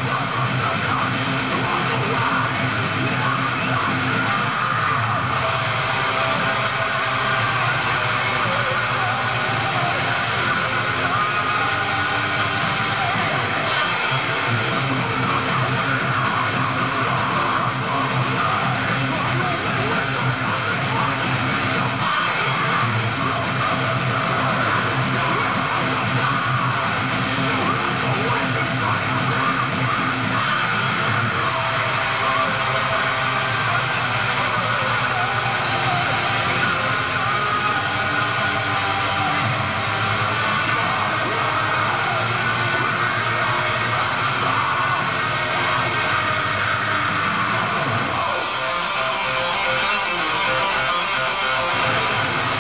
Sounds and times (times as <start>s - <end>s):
Electric guitar: 0.0s - 52.6s.